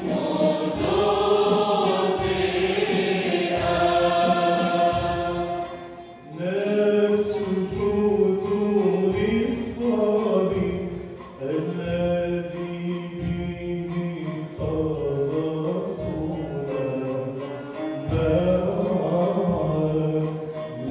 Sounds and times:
Choir: 0:00.0 - 0:20.9.

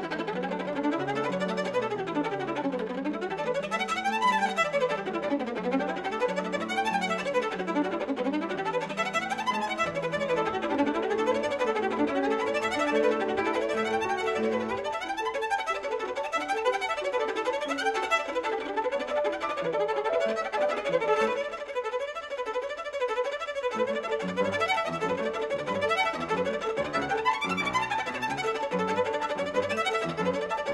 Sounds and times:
Violin, fiddle: 0:00.0 - 0:30.7.

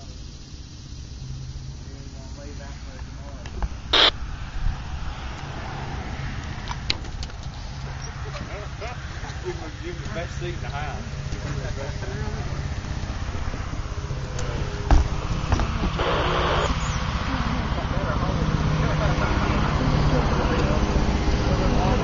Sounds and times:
Speech: 0:01.8 - 0:03.6, 0:08.2 - 0:12.7, 0:17.3 - 0:22.0
Helicopter: 0:11.2 - 0:22.0.

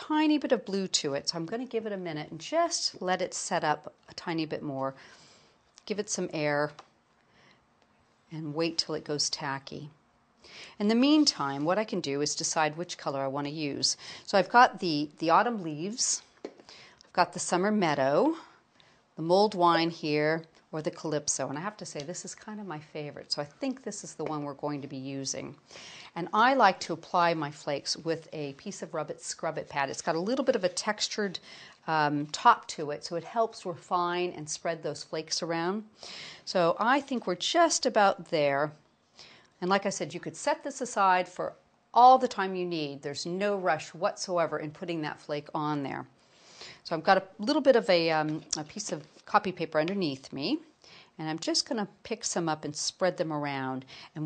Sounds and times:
Speech: 0:00.0 - 0:05.0, 0:05.8 - 0:06.8, 0:08.3 - 0:10.0, 0:10.8 - 0:16.3, 0:17.1 - 0:18.5, 0:19.2 - 0:25.6, 0:26.2 - 0:35.9, 0:36.5 - 0:38.8, 0:39.6 - 0:46.1, 0:46.8 - 0:54.2
Inside, small room: 0:00.0 - 0:54.2.

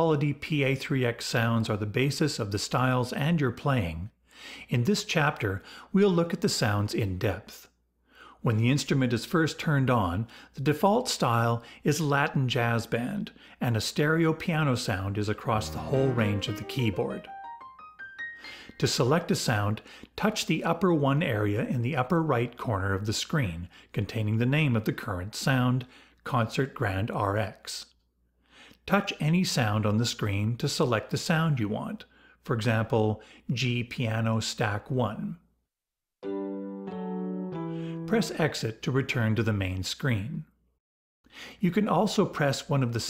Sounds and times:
Speech: 0:00.0 - 0:07.7, 0:08.4 - 0:17.3, 0:18.8 - 0:28.0, 0:28.8 - 0:35.5, 0:38.1 - 0:40.6, 0:41.6 - 0:43.1.

